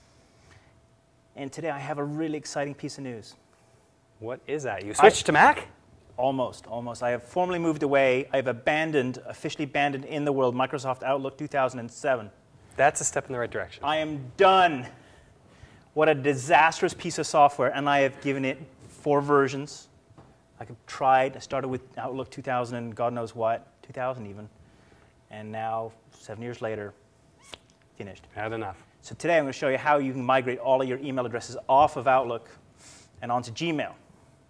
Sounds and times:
Speech: 1.4 - 3.4, 4.2 - 15.0, 16.0 - 19.9, 20.6 - 24.5, 25.3 - 27.0, 28.0 - 32.6, 33.2 - 34.0.

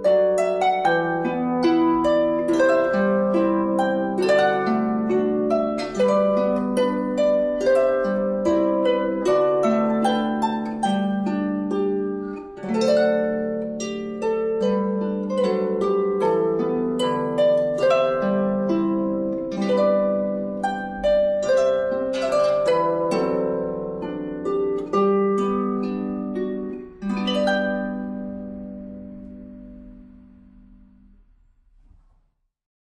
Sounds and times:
Plucked string instrument: 0.0 - 32.0
Harp: 0.0 - 32.2.

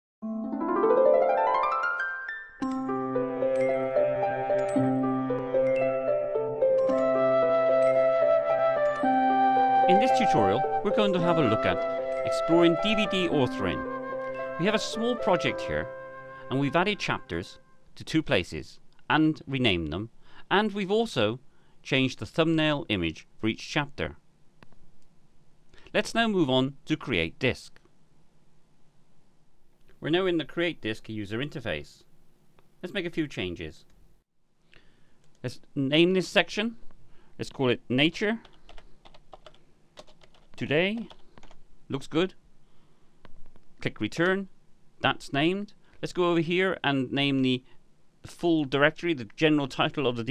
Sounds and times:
Music: 0.2 - 17.8.

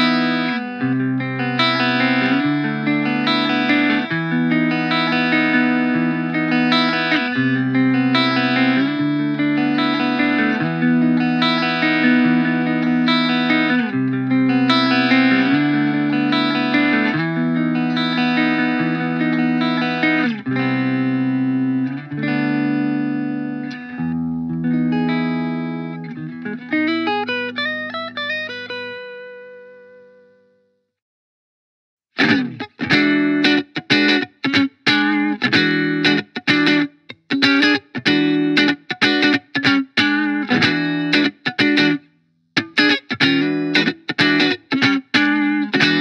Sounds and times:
Electric guitar: 0.0 - 30.6, 32.2 - 46.0
Effects unit: 0.0 - 31.0, 32.1 - 46.0.

